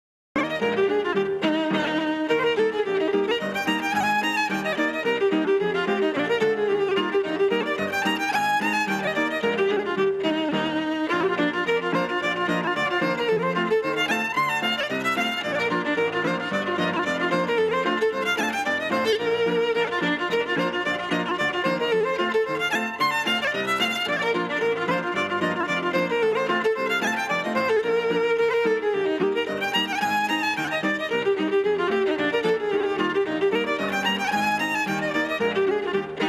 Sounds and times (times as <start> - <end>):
Bowed string instrument: 0.4 - 36.2.